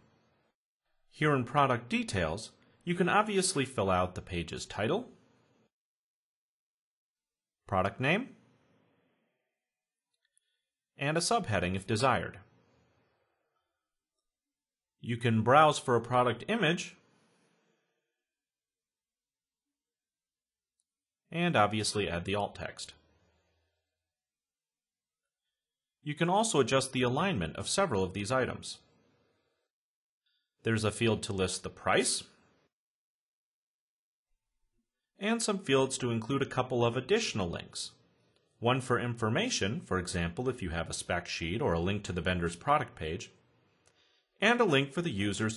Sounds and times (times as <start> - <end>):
Speech: 1.1 - 5.2, 7.6 - 8.4, 11.0 - 12.5, 15.0 - 17.0, 21.3 - 23.0, 26.0 - 28.9, 30.6 - 32.4, 35.2 - 38.0, 38.6 - 43.4, 44.4 - 45.5.